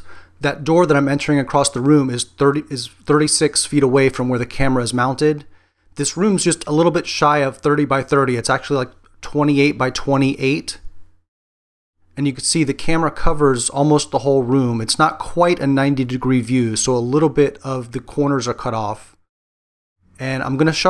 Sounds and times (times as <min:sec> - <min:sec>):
Speech: 0:00.0 - 0:10.9, 0:12.2 - 0:19.2, 0:20.2 - 0:20.9.